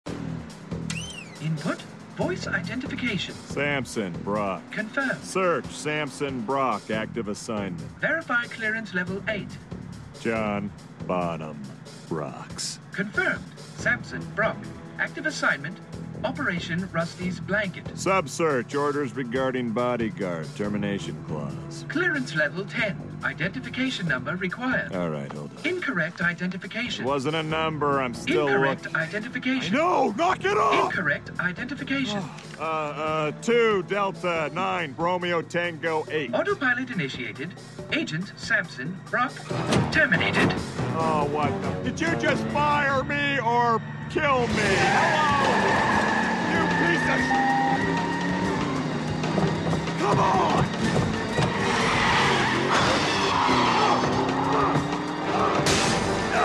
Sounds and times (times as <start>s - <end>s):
Music: 0.0s - 56.4s.